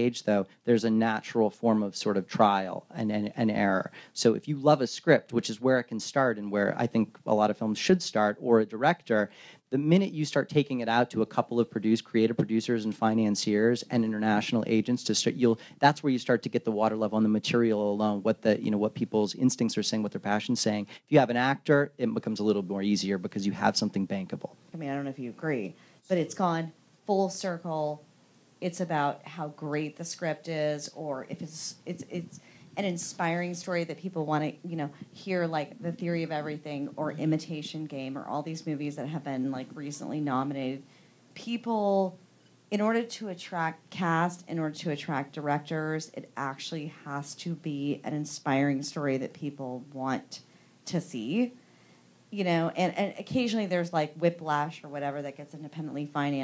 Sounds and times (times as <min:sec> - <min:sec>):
Speech: 0:00.0 - 0:28.0, 0:28.6 - 0:40.8, 0:41.4 - 0:51.6, 0:52.4 - 0:56.4.